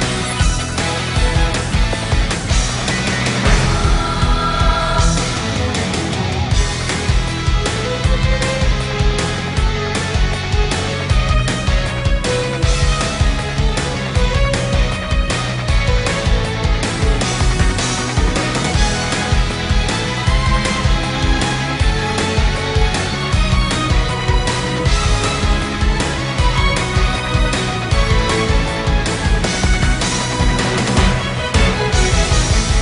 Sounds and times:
Music: 0.0s - 32.8s.

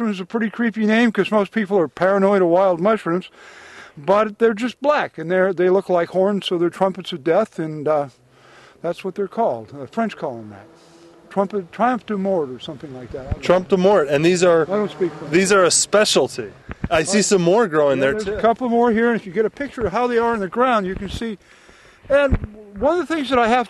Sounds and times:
Speech: 0.0s - 3.3s, 4.0s - 8.1s, 8.8s - 10.7s, 11.3s - 21.4s, 22.1s - 23.6s
Outside, rural or natural: 0.0s - 23.6s.

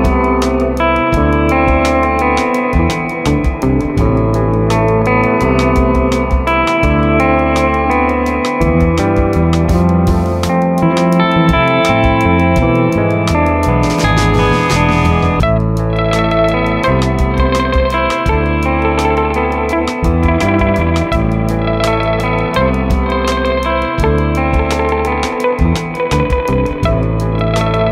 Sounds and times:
Distortion: 0.0s - 27.9s
Music: 0.0s - 27.9s.

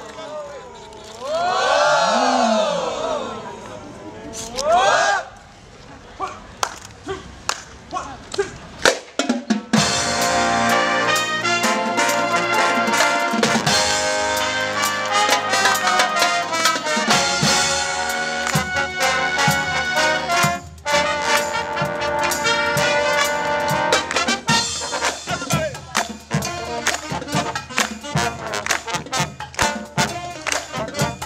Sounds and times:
Music: 9.2s - 31.2s
Speech: 25.2s - 27.2s.

